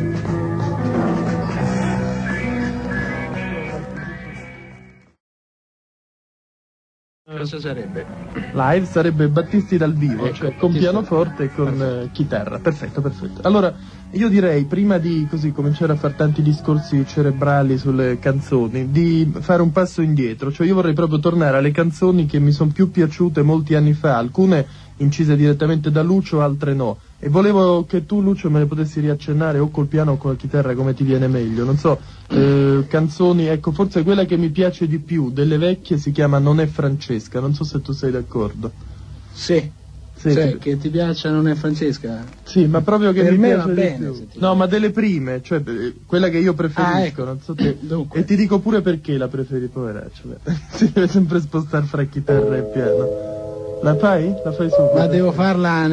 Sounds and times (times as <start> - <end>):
Music: 0.0 - 5.2, 7.4 - 19.2, 52.3 - 55.9
Speech: 7.3 - 38.8, 39.4 - 53.1, 53.8 - 55.9.